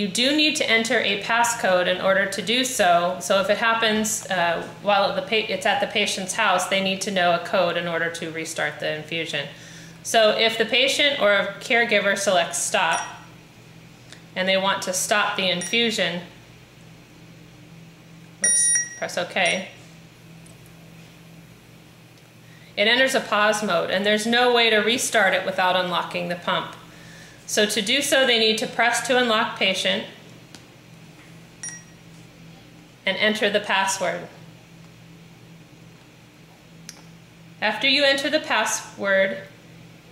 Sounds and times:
Speech: 0.0s - 9.5s, 10.1s - 13.2s, 14.4s - 16.3s, 19.0s - 19.8s, 22.8s - 26.8s, 27.5s - 30.2s, 33.1s - 34.4s, 37.6s - 39.5s.

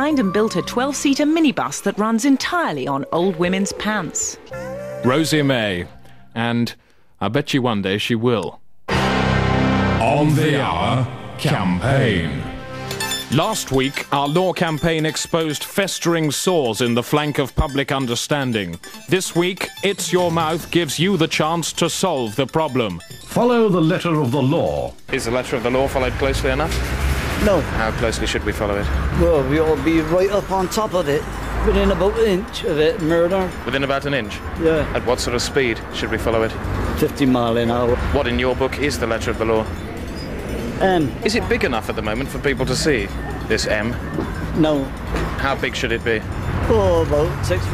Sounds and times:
Speech: 0.0s - 4.4s, 5.0s - 8.6s, 10.0s - 12.5s, 13.3s - 26.7s, 40.8s - 44.0s, 44.6s - 47.7s
Music: 0.0s - 6.5s, 8.9s - 47.7s.

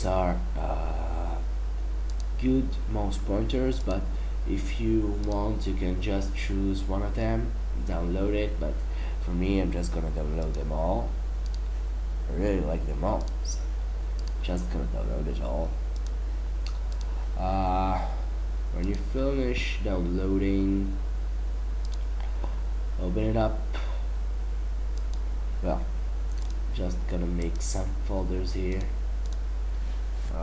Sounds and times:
Speech: 0.0s - 1.4s, 2.4s - 11.2s, 12.3s - 13.7s, 14.4s - 15.8s, 17.4s - 18.1s, 18.7s - 21.0s, 23.0s - 23.7s, 25.6s - 25.9s, 26.8s - 28.9s.

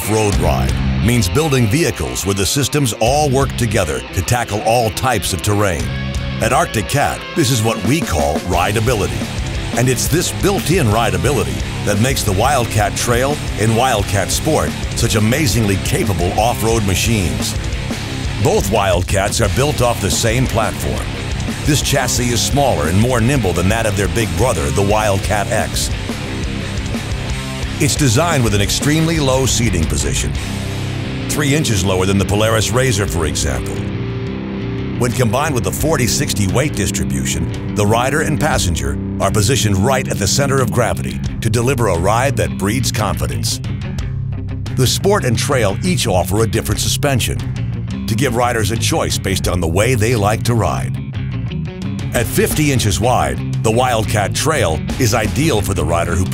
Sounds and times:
Speech: 0.0s - 17.6s, 18.4s - 21.1s, 21.7s - 25.9s, 27.8s - 30.4s, 31.3s - 33.9s, 35.0s - 43.6s, 44.8s - 47.4s, 48.1s - 51.0s, 52.1s - 56.3s
Music: 0.0s - 56.3s.

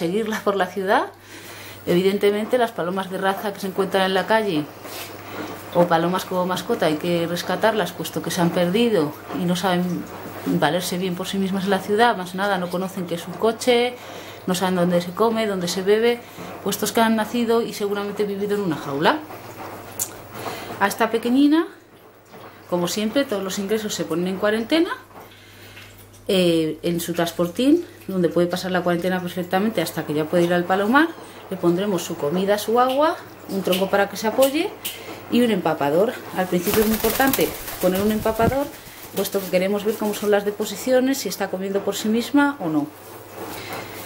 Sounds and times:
Speech: 0.0s - 1.2s, 1.9s - 4.8s, 5.7s - 19.3s, 20.8s - 21.8s, 22.7s - 25.1s, 26.3s - 43.0s
Inside, small room: 0.0s - 44.0s.

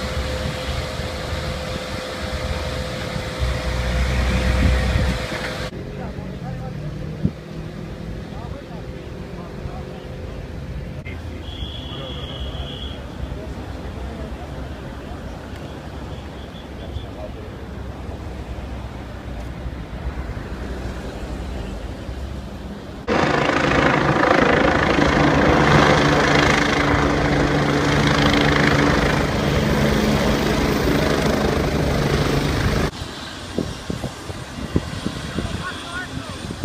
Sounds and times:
Truck: 0.0s - 34.7s.

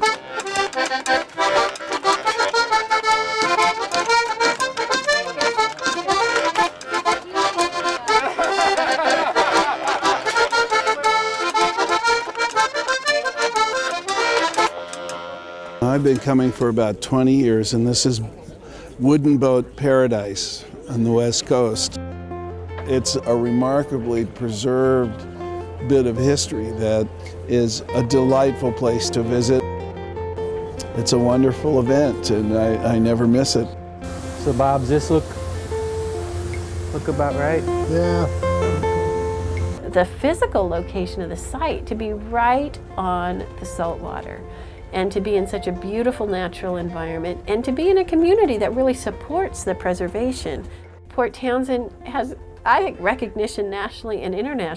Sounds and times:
Music: 0.0s - 17.9s, 20.3s - 54.7s.

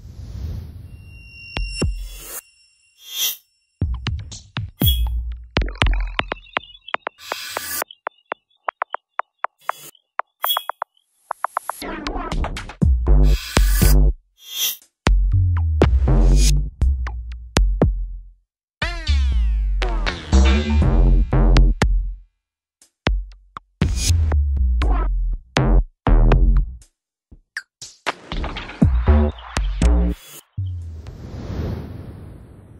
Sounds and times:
Drum machine: 3.8s - 14.1s, 15.1s - 18.2s, 24.8s - 26.8s.

